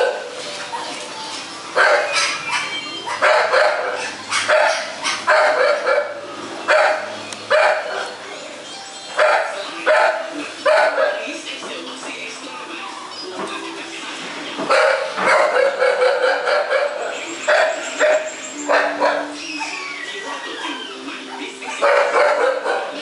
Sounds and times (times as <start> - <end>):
Bow-wow: 1.8 - 8.1, 14.7 - 19.4, 21.7 - 23.0
Speech: 9.4 - 14.6, 19.6 - 23.0
Music: 11.4 - 15.2, 17.2 - 23.0.